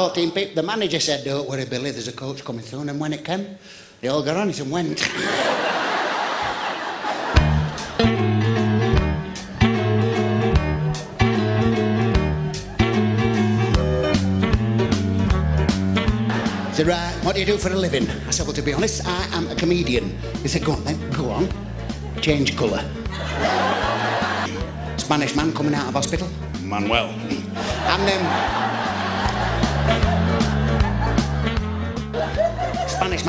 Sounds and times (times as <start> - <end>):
Speech: 0.0 - 5.1, 16.8 - 21.6, 22.2 - 22.9, 25.0 - 28.3, 32.9 - 33.2
Blues: 7.1 - 33.2
Steel guitar, slide guitar: 8.0 - 15.7.